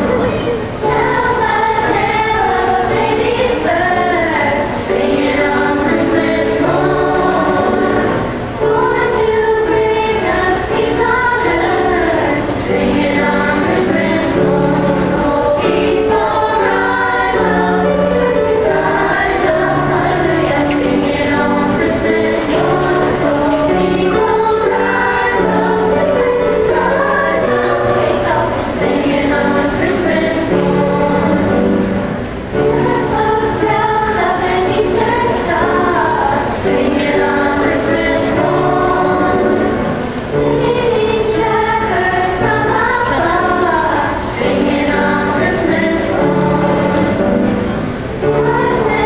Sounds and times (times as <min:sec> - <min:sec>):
Choir: 0:00.0 - 0:49.0.